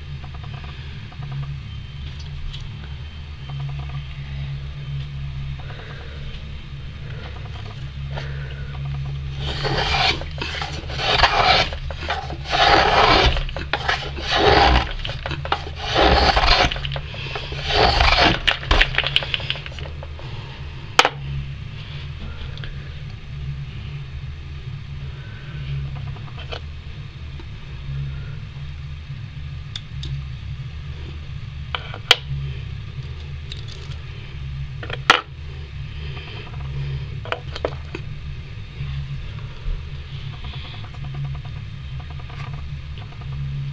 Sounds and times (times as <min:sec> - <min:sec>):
Filing (rasp): 0:09.3 - 0:19.9
Wood: 0:09.4 - 0:20.0.